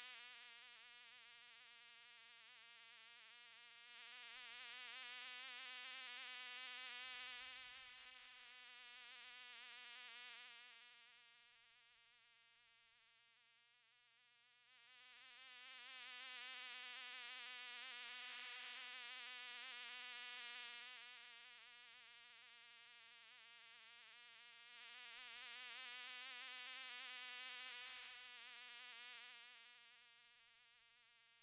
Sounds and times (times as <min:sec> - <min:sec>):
Mosquito: 0:03.4 - 0:11.2, 0:14.8 - 0:30.1
Fly, housefly: 0:03.9 - 0:11.0, 0:14.8 - 0:22.6, 0:23.2 - 0:29.9.